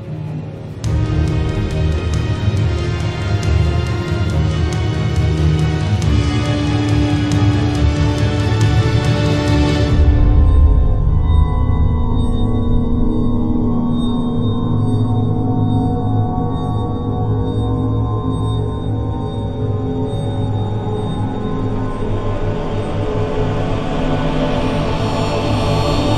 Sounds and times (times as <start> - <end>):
Soundtrack music: 0.0 - 18.0, 20.7 - 26.1.